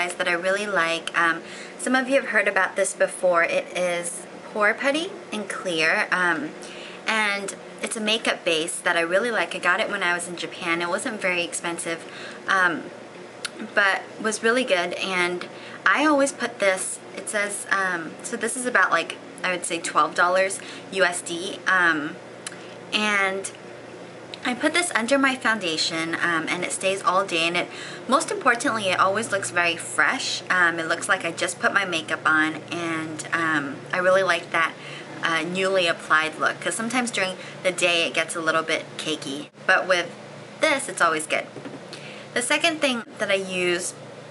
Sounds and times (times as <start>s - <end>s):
Speech: 0.0s - 12.9s, 13.5s - 22.2s, 23.0s - 23.6s, 24.4s - 41.5s, 42.4s - 44.0s.